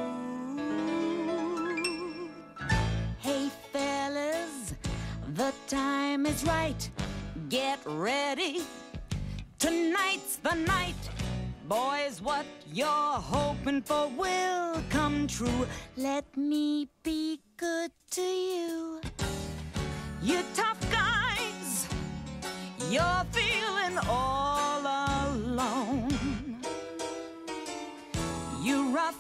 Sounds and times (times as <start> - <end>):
Music: 0.0 - 29.2.